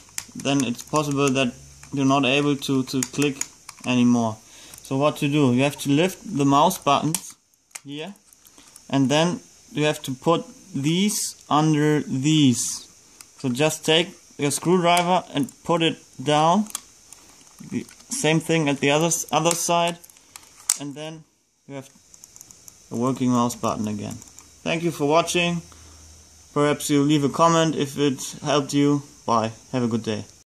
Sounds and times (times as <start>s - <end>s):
Speech: 0.4s - 8.2s, 8.9s - 16.8s, 17.6s - 20.0s, 20.8s - 22.0s, 22.9s - 25.7s, 26.6s - 30.4s.